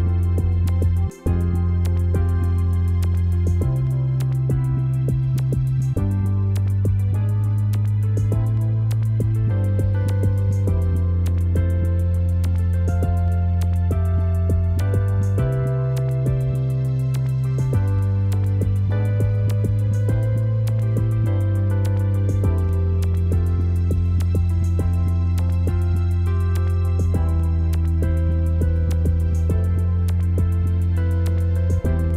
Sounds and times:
New-age music: 0.0s - 32.1s
Tender music: 0.0s - 32.1s.

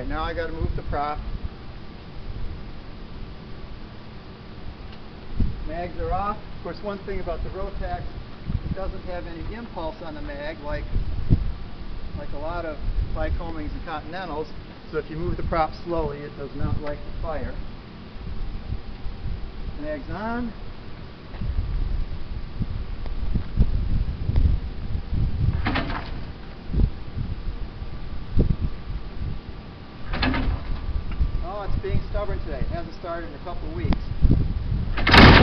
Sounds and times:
Speech: 0.0s - 1.2s, 5.7s - 8.1s, 8.8s - 10.9s, 12.2s - 17.6s, 19.8s - 20.6s, 31.4s - 34.1s.

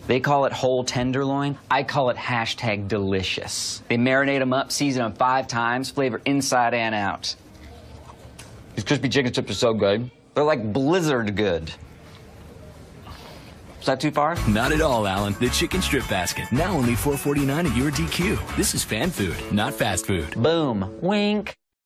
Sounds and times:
Speech: 0.1s - 7.4s, 13.8s - 21.6s
Music: 14.4s - 21.6s.

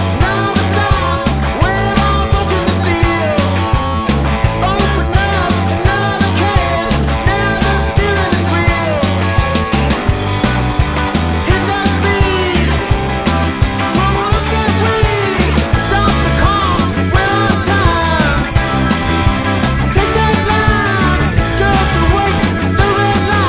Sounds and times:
Independent music: 0.0s - 23.4s.

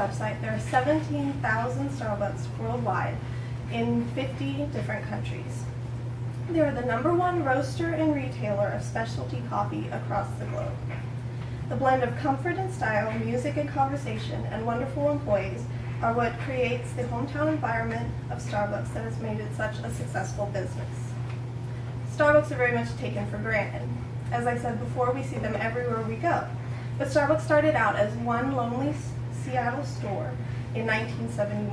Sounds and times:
Female speech, woman speaking: 0.0s - 5.7s, 6.5s - 10.9s, 11.7s - 21.2s, 22.1s - 31.7s.

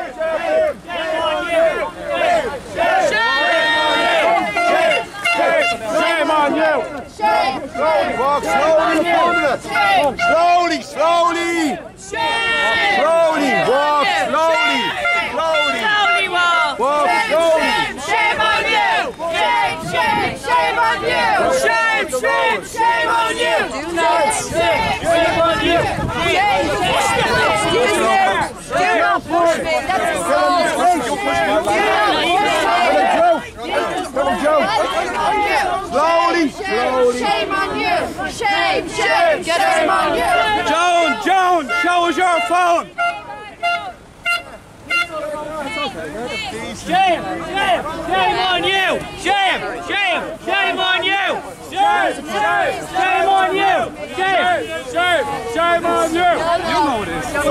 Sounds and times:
Speech: 0.0s - 44.0s, 44.8s - 57.5s.

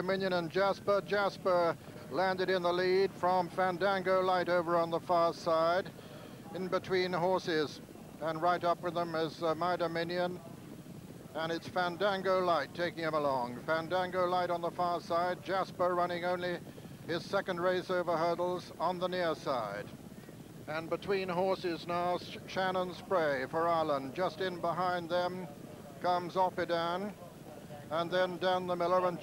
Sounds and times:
Speech: 0.0s - 10.7s, 11.3s - 19.9s, 20.7s - 29.2s.

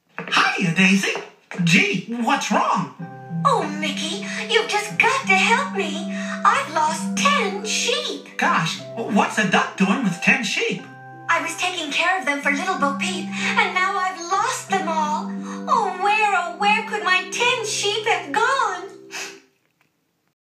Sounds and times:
Speech: 0.2s - 18.9s
Music: 1.6s - 19.5s.

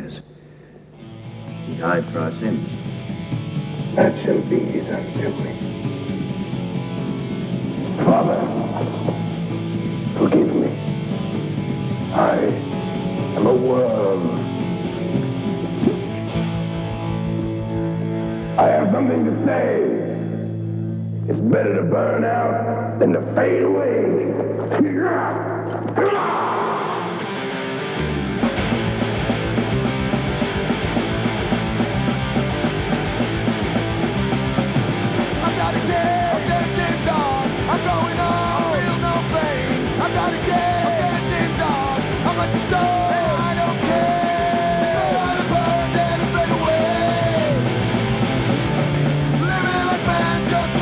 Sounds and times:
Speech: 0.0s - 0.3s, 1.7s - 2.7s, 4.0s - 5.6s, 8.0s - 8.8s, 10.2s - 10.8s, 12.1s - 12.6s, 13.4s - 14.4s, 18.6s - 20.2s, 21.3s - 27.0s
Music: 0.0s - 50.8s.

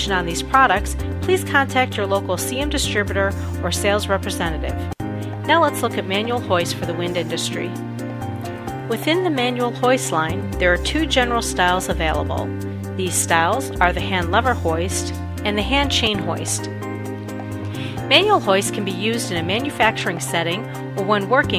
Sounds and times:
Speech: 0.0s - 4.9s, 5.5s - 7.7s, 8.9s - 16.7s, 18.1s - 21.5s
Music: 0.0s - 21.5s.

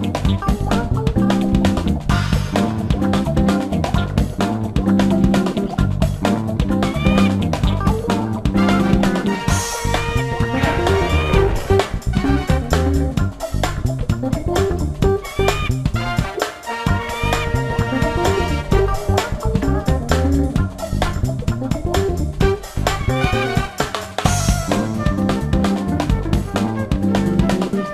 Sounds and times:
Music: 0.0s - 27.9s.

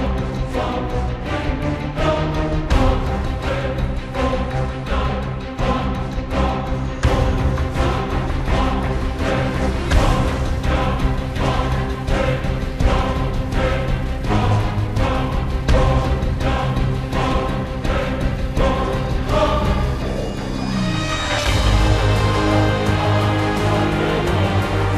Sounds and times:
Music: 0.0s - 24.9s.

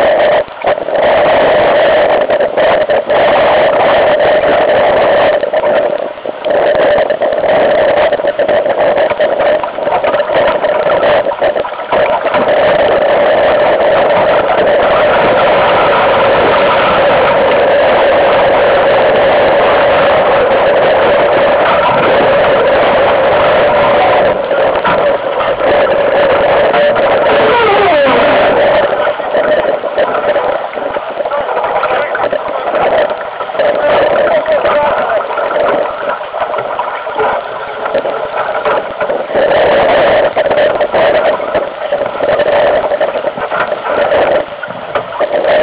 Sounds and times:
Sailboat, sailing ship: 0.0s - 45.6s
Speech: 31.2s - 32.8s, 33.6s - 35.3s.

